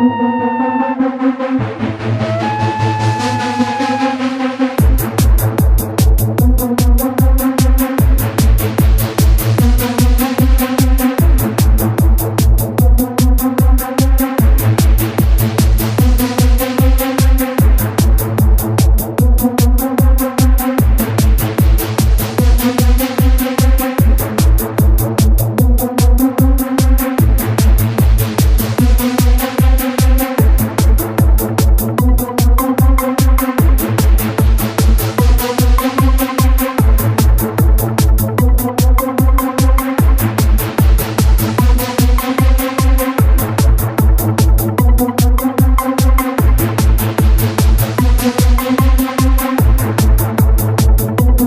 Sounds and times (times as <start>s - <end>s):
Techno: 0.0s - 51.4s
Trance music: 0.0s - 51.4s.